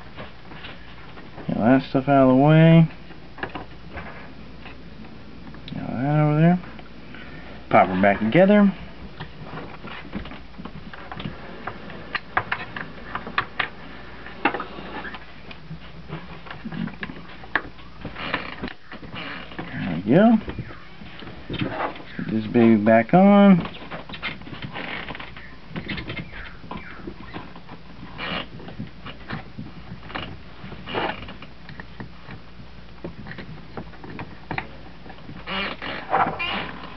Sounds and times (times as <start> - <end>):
Speech: 1.5 - 3.0, 5.7 - 6.7, 7.7 - 8.8, 19.7 - 20.5, 22.2 - 23.7.